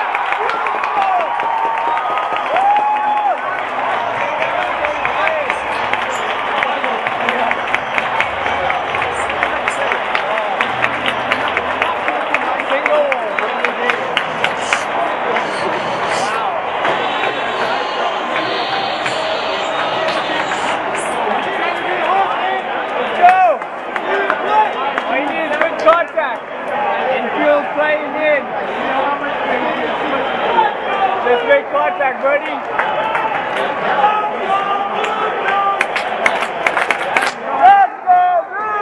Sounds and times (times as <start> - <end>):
Speech: 4.1 - 32.7.